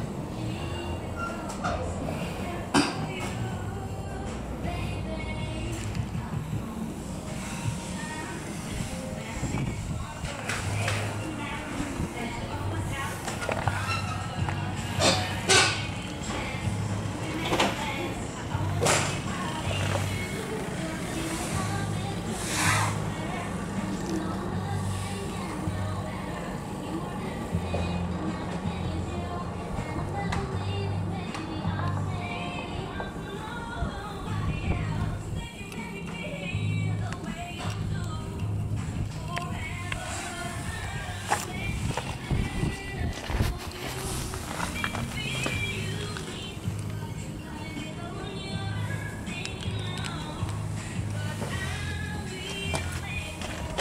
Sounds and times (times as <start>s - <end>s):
Music: 0.0s - 53.8s
Vehicle: 0.0s - 53.8s.